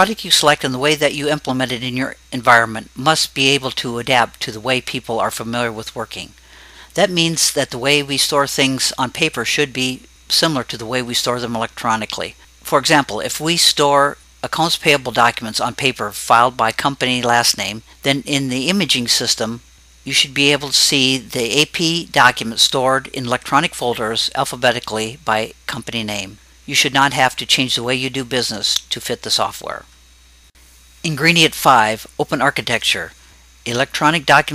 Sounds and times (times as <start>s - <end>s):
Narration, monologue: 0.0s - 34.5s.